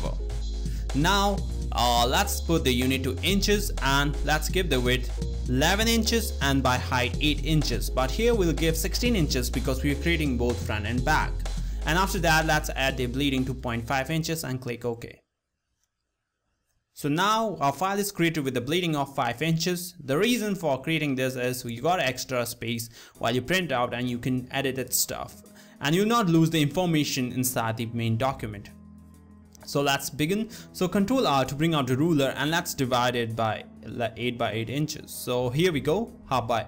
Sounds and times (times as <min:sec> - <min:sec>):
Music: 0:00.0 - 0:15.1, 0:17.0 - 0:36.6
Speech: 0:00.9 - 0:15.2, 0:17.0 - 0:28.7, 0:29.6 - 0:36.6.